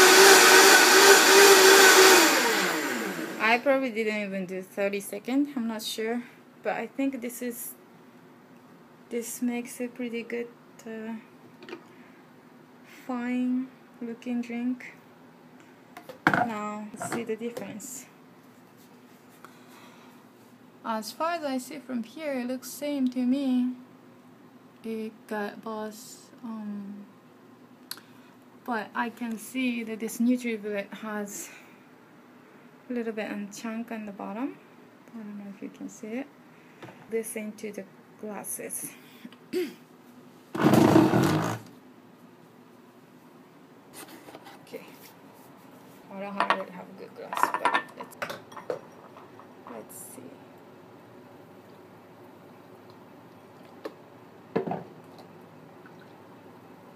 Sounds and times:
Speech: 0:03.4 - 0:07.8, 0:09.1 - 0:11.3, 0:12.9 - 0:15.0, 0:16.4 - 0:18.2, 0:20.8 - 0:23.8, 0:24.8 - 0:27.1, 0:28.7 - 0:31.6, 0:32.9 - 0:36.3, 0:37.1 - 0:39.0, 0:46.1 - 0:48.2, 0:49.7 - 0:50.5.

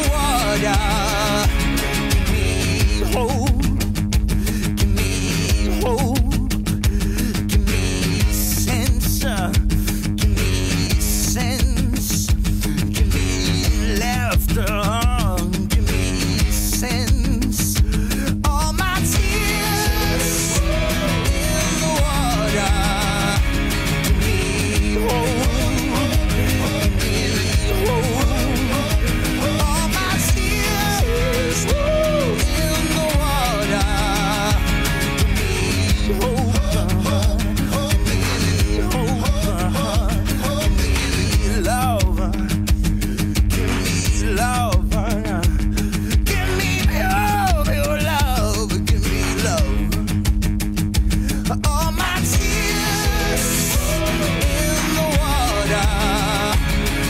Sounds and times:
Music: 0:00.0 - 0:57.0.

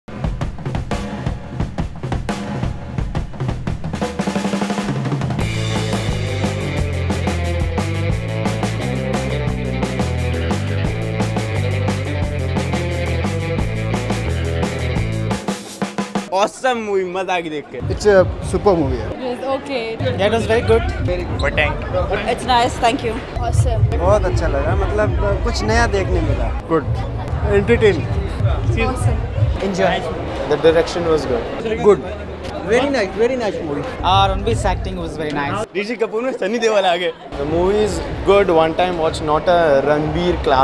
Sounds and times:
Bass drum: 0:00.1 - 0:16.3, 0:17.8 - 0:19.2, 0:20.0 - 0:29.8, 0:34.0 - 0:35.7
Drum kit: 0:00.1 - 0:16.4, 0:17.8 - 0:19.2, 0:20.0 - 0:29.8, 0:34.0 - 0:35.6.

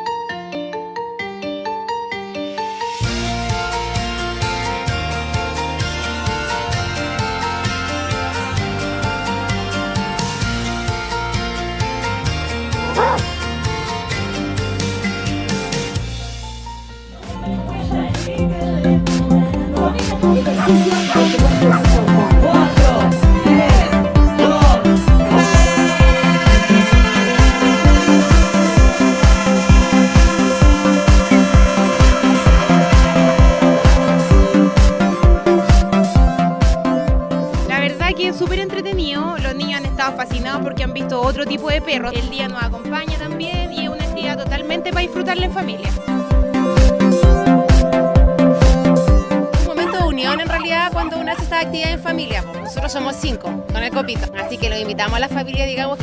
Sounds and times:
Music: 0:00.0 - 0:56.0.

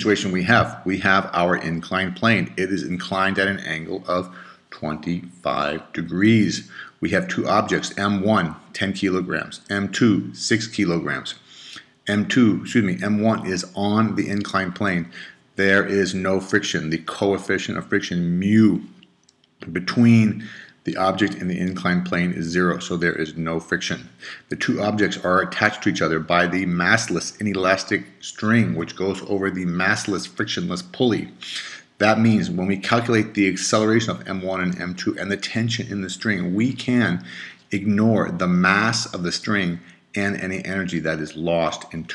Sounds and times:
Speech: 0:00.0 - 0:19.0, 0:19.6 - 0:42.1.

